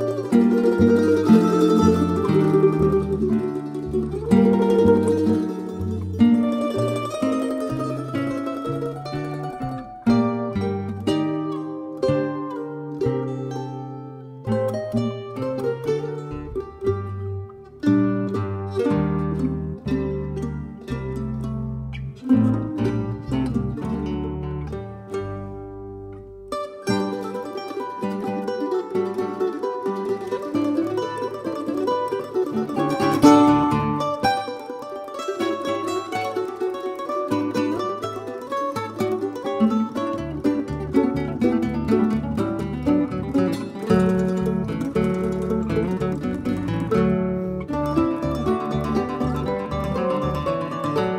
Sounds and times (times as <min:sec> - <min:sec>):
Mandolin: 0:00.0 - 0:51.1
Ukulele: 0:00.0 - 0:51.1.